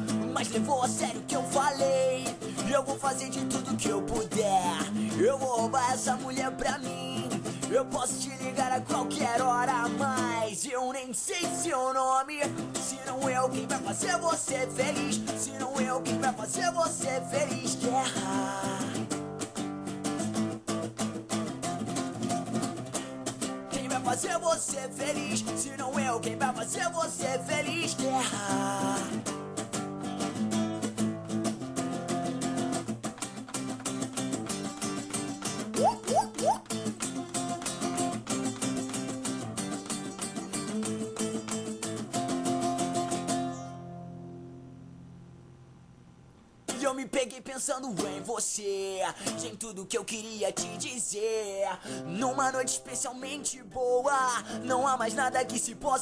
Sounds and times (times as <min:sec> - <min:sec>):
Music: 0:00.0 - 0:45.3, 0:46.7 - 0:56.0.